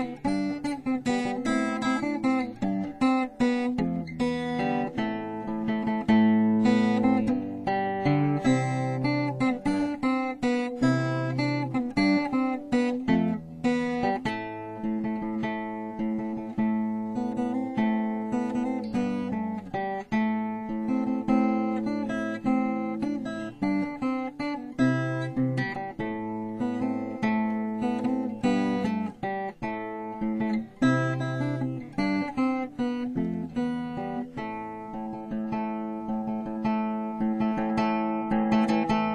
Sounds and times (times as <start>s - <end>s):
Strum: 0.0s - 39.1s.